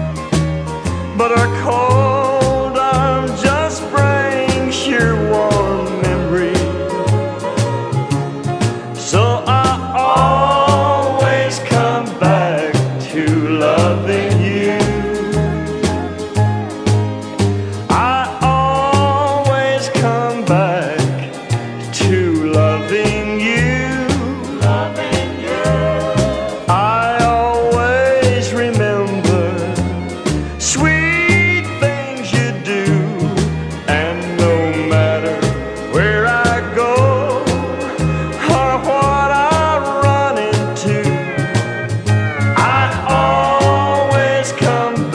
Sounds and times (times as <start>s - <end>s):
Country: 0.0s - 45.1s.